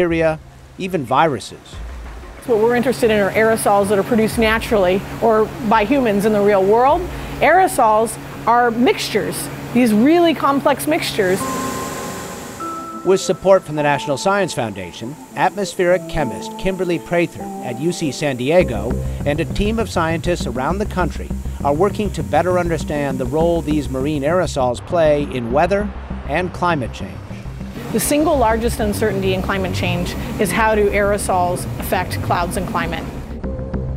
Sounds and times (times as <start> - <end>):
Speech: 0.0 - 1.8, 2.5 - 11.4, 13.1 - 27.2, 28.0 - 33.1
Music: 0.0 - 33.9.